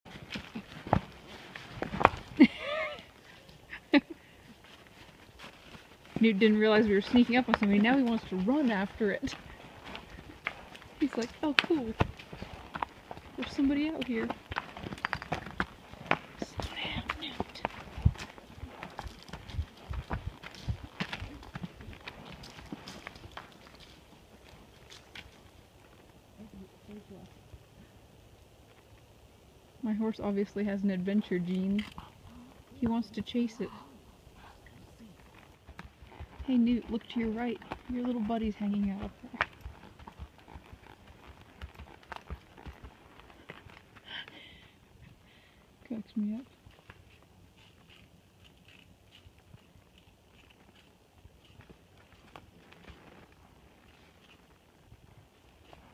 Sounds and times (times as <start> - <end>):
Clip-clop: 0.1 - 55.9
Speech: 36.5 - 39.4.